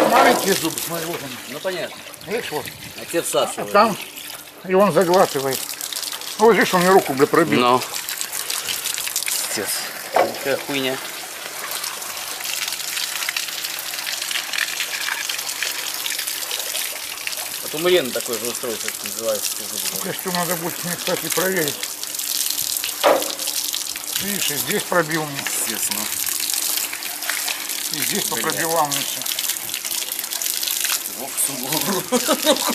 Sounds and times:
Water: 0.0 - 32.7
Water tap, faucet: 0.0 - 32.7.

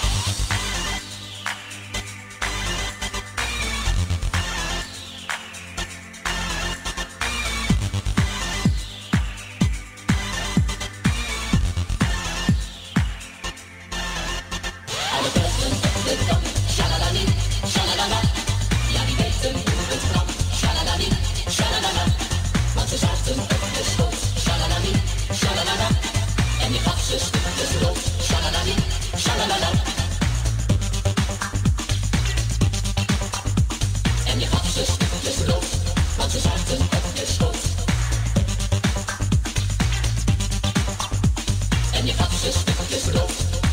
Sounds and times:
Music: 0.0 - 43.7.

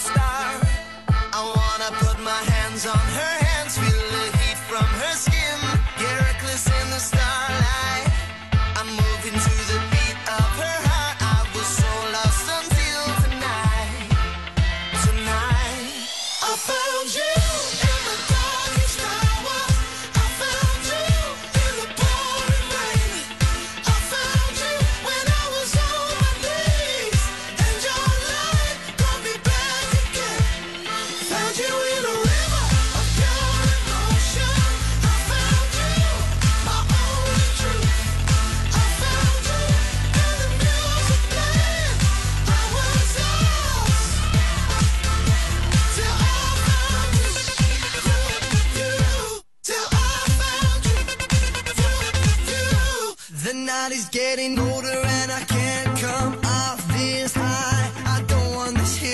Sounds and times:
Music: 0.0 - 53.4, 54.4 - 59.1.

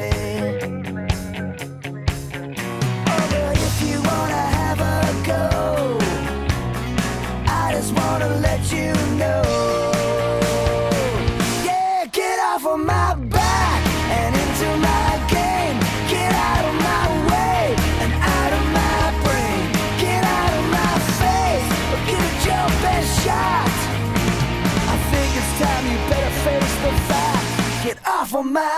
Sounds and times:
Music: 0.0 - 12.0, 12.8 - 28.0.

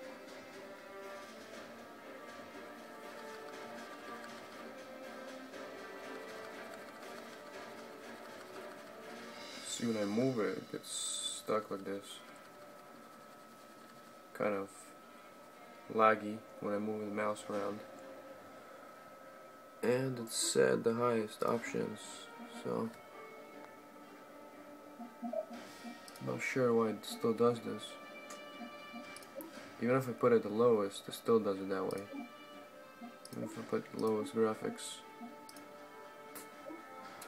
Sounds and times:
Speech: 9.7 - 12.3, 14.4 - 14.8, 15.9 - 17.9, 19.8 - 23.0, 26.2 - 28.0, 29.8 - 32.1, 33.4 - 35.1.

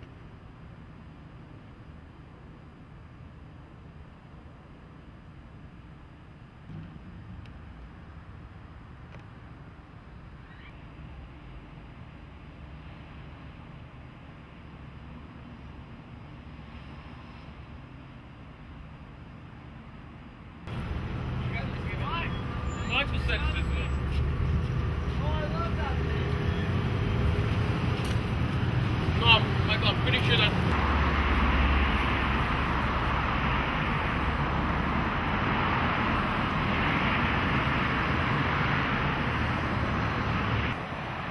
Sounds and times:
Speech: 21.5 - 24.0, 25.2 - 26.3, 29.2 - 30.6.

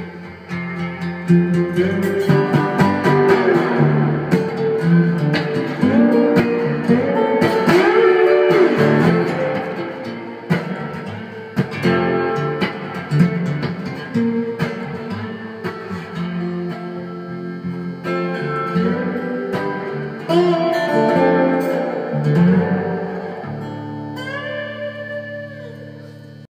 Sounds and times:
Electric guitar: 0.0 - 26.5
Strum: 0.0 - 26.5.

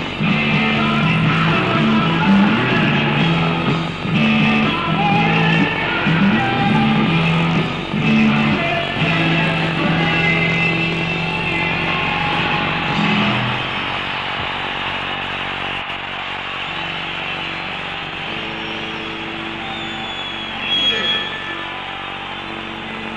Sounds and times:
Singing: 0.0 - 14.6
Pop music: 0.0 - 15.2
Rock and roll: 0.0 - 23.1.

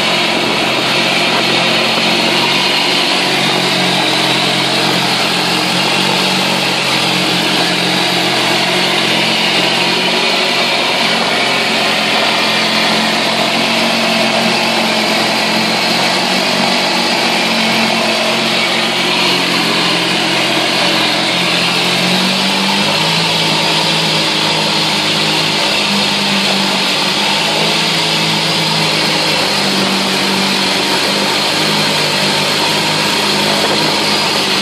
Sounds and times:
Engine: 0.0 - 34.6.

